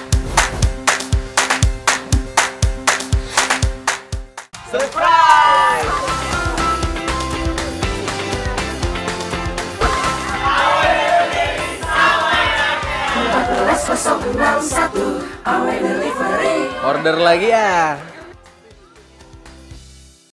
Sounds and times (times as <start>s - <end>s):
Music: 0.0s - 20.3s
Speech: 16.8s - 19.3s.